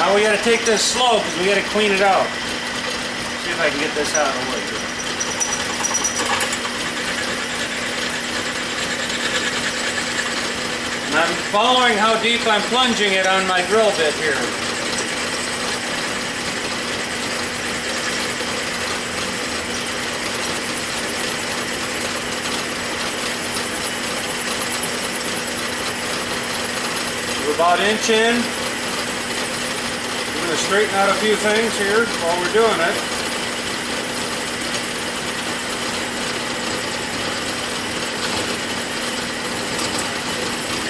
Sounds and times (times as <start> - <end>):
Speech: 0.0 - 2.4, 3.4 - 4.8, 11.1 - 14.6, 27.4 - 28.6, 30.4 - 33.1.